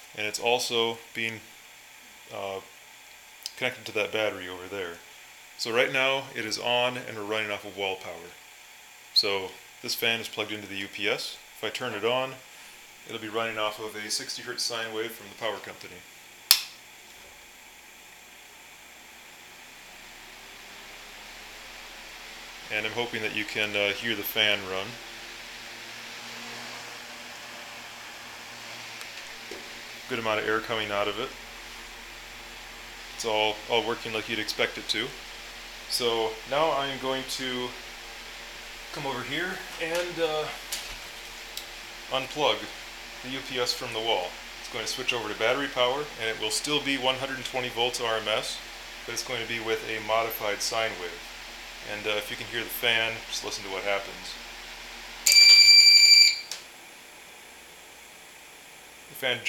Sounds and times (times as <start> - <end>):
Smoke detector, smoke alarm: 55.3 - 56.6.